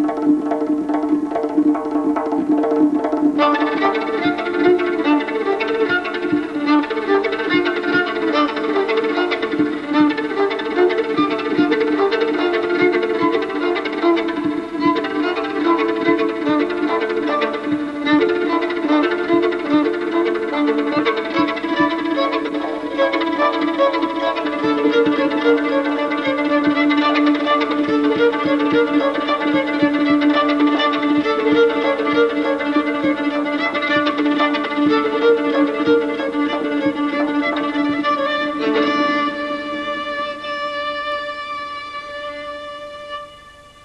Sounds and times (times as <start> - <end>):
Violin, fiddle: 0.0 - 43.8.